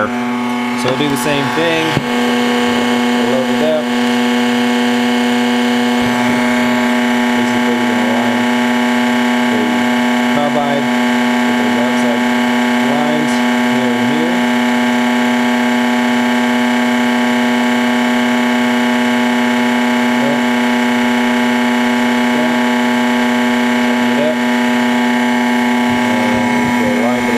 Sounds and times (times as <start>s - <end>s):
Speech: 0.8s - 3.9s, 7.4s - 8.4s, 9.5s - 14.4s, 20.2s - 20.5s, 22.3s - 22.7s, 23.9s - 24.5s, 26.0s - 27.3s.